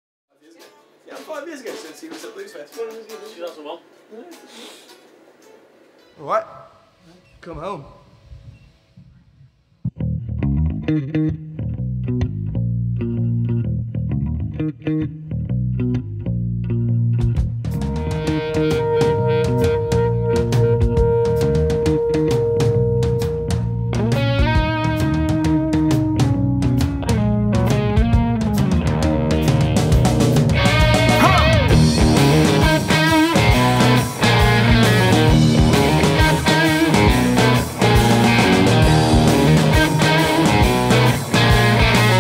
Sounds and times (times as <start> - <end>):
Music: 0.6 - 7.0, 8.0 - 42.2.